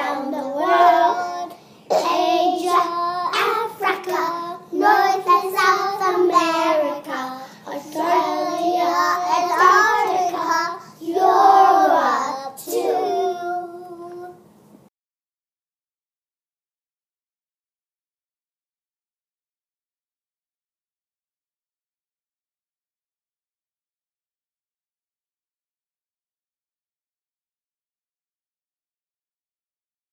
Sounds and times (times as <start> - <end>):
Child singing: 0.0 - 14.4.